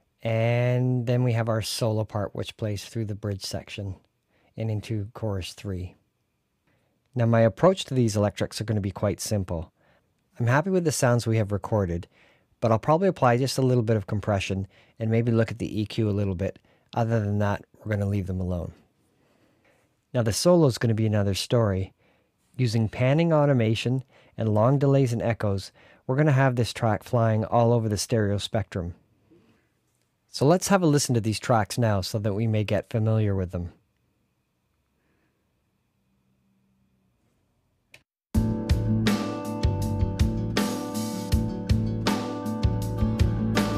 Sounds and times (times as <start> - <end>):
Speech: 0.2 - 6.0, 7.2 - 9.8, 10.4 - 18.8, 20.1 - 22.0, 22.6 - 29.0, 30.3 - 33.8.